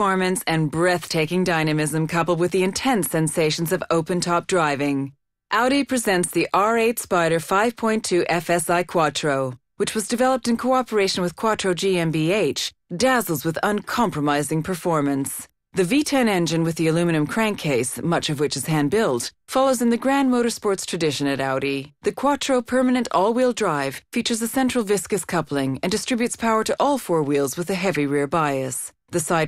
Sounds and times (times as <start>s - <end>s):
Speech: 0.0s - 29.4s.